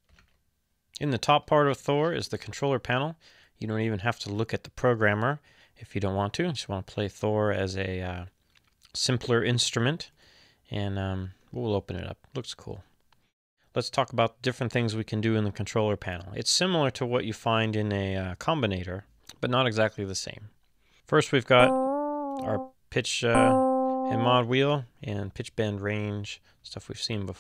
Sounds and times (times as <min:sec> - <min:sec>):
Speech: 0:01.0 - 0:10.1, 0:10.7 - 0:12.9, 0:13.7 - 0:21.8, 0:22.4 - 0:27.4.